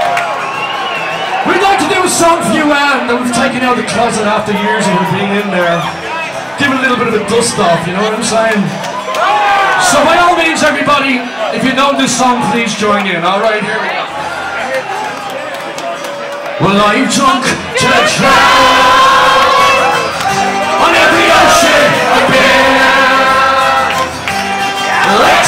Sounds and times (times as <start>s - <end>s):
Music: 0.0s - 25.4s
Speech: 1.5s - 6.0s, 6.6s - 8.7s, 9.8s - 14.0s, 16.6s - 18.2s.